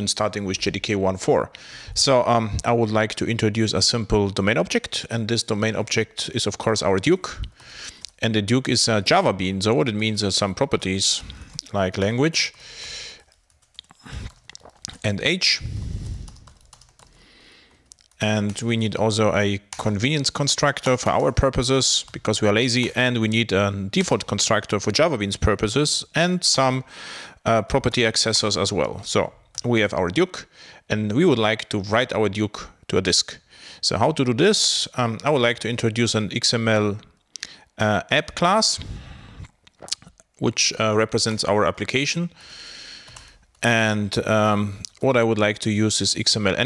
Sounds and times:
Speech: 0.0 - 7.5, 8.2 - 12.5, 14.9 - 15.7, 18.2 - 37.1, 37.8 - 38.8, 40.4 - 42.4, 43.6 - 46.6.

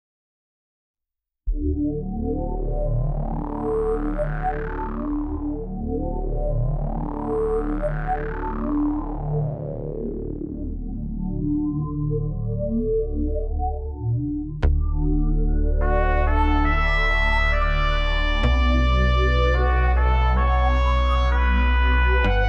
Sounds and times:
Music: 1.5 - 22.4.

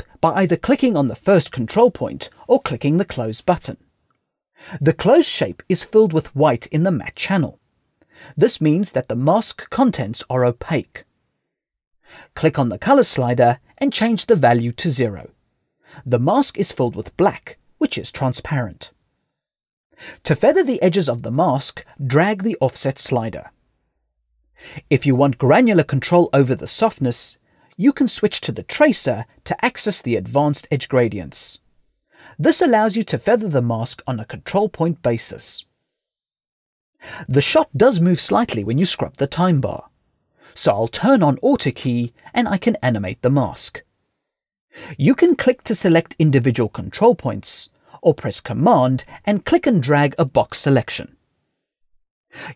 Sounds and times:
Speech: 0.0 - 3.8, 4.8 - 7.6, 8.4 - 11.1, 12.3 - 15.4, 16.0 - 19.0, 20.2 - 23.6, 24.8 - 31.6, 32.4 - 35.7, 37.2 - 39.9, 40.6 - 43.9, 44.8 - 51.2.

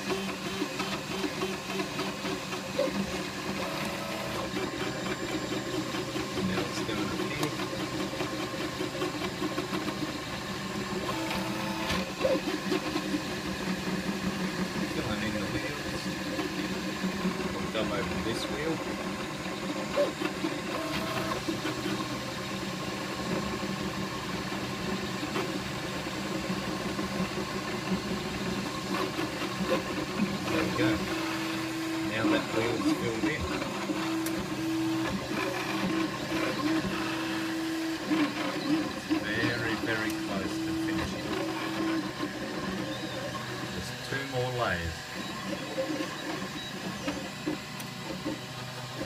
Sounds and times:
Speech: 6.4 - 7.6, 14.9 - 16.2, 17.6 - 18.8, 30.5 - 31.1, 32.1 - 33.6, 39.1 - 41.6, 43.7 - 45.0.

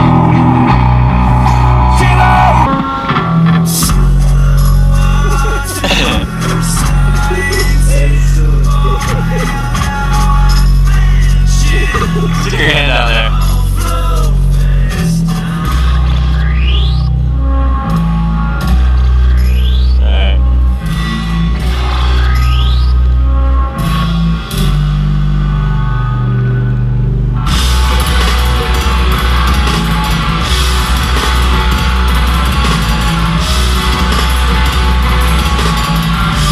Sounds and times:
Music: 0.0 - 36.5.

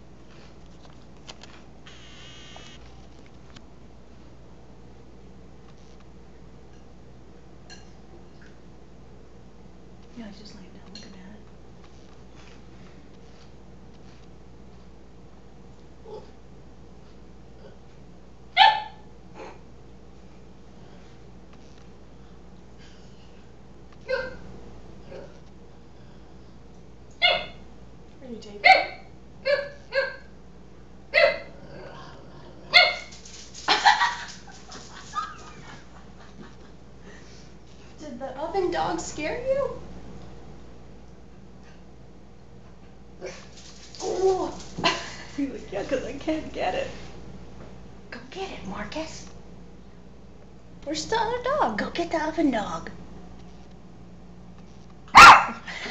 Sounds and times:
Speech: 10.2 - 11.4, 28.2 - 28.9, 38.0 - 39.8, 45.4 - 47.0, 48.2 - 49.3, 50.8 - 53.0.

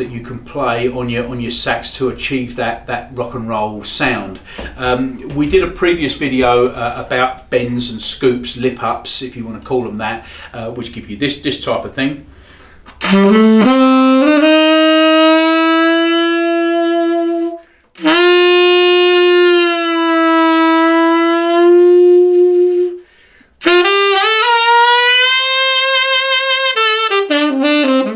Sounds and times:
Music: 12.9 - 23.0, 23.6 - 28.1.

